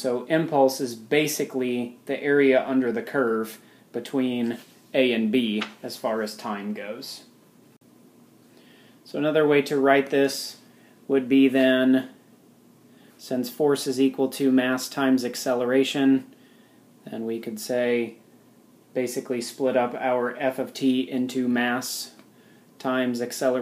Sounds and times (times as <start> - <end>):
Speech: 0.0 - 7.3, 9.0 - 12.2, 13.2 - 16.4, 17.0 - 18.2, 19.0 - 23.6.